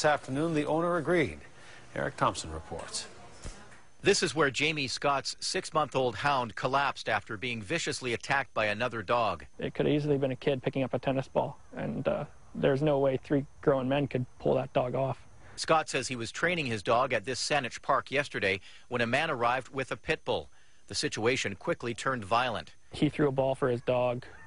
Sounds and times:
Speech: 4.0 - 24.3.

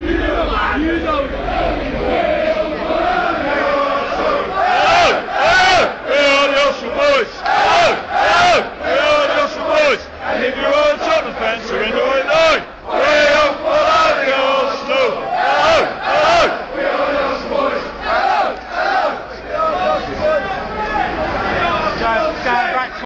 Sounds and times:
Speech: 10.6 - 12.5, 19.3 - 23.0.

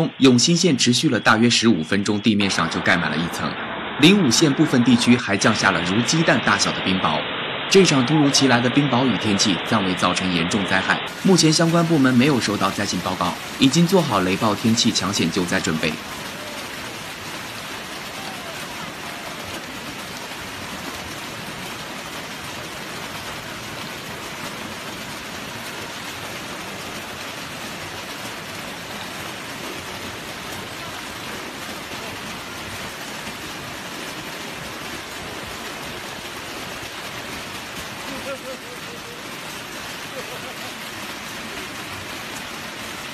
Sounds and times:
Rain on surface: 0.0 - 43.1.

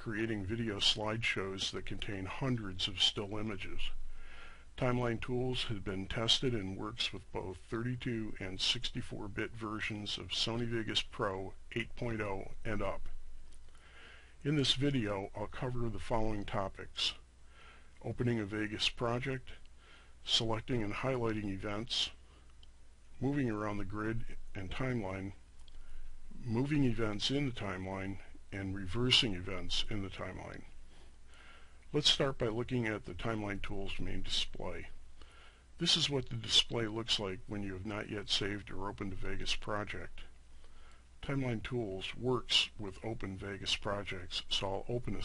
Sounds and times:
Speech: 0.0 - 4.0, 4.8 - 13.2, 14.4 - 17.2, 18.0 - 19.6, 20.2 - 22.2, 23.2 - 25.4, 26.3 - 30.7, 31.9 - 35.0, 35.8 - 40.3, 41.2 - 45.2.

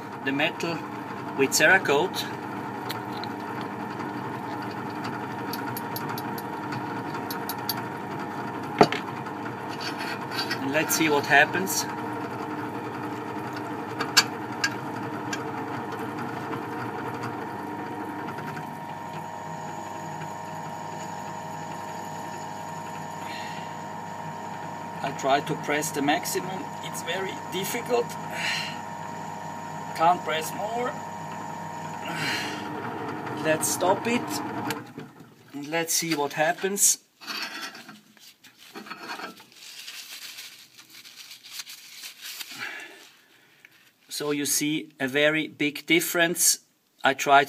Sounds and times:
Speech: 0.2 - 0.8, 1.4 - 2.3, 10.6 - 11.9, 25.0 - 28.2, 30.0 - 31.0, 33.4 - 34.4, 35.6 - 37.0, 44.1 - 47.4.

